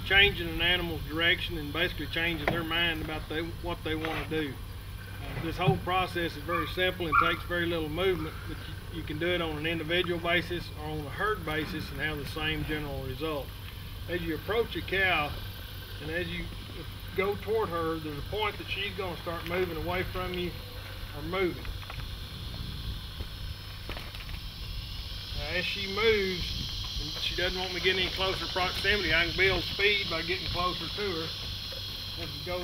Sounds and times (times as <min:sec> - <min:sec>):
Speech: 0:00.1 - 0:04.6, 0:05.2 - 0:13.5, 0:14.1 - 0:15.4, 0:16.0 - 0:16.5, 0:17.2 - 0:21.6, 0:25.4 - 0:31.3, 0:32.2 - 0:32.6.